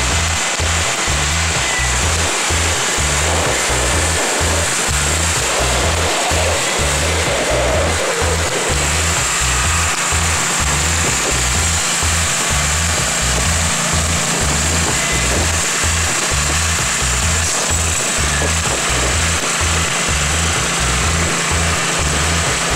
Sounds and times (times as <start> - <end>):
Idling: 0.0 - 22.7
Music: 0.0 - 22.7
Outside, urban or manmade: 0.0 - 22.7.